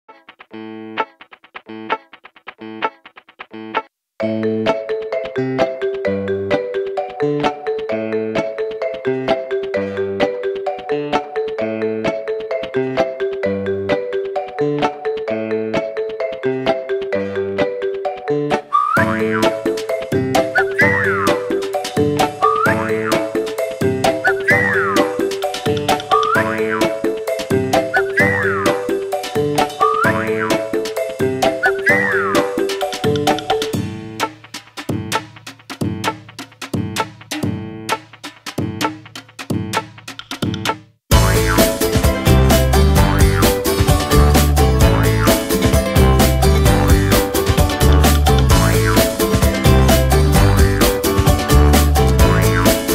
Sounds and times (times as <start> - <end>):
Music: 0.1 - 52.9.